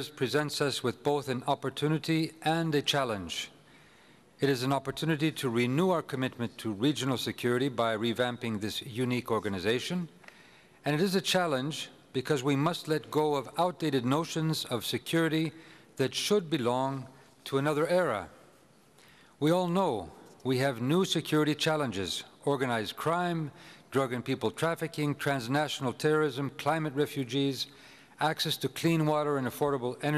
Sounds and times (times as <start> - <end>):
Male speech, man speaking: 0.0 - 3.5, 4.4 - 10.1, 10.8 - 18.3, 19.4 - 30.1
Narration, monologue: 0.0 - 30.1.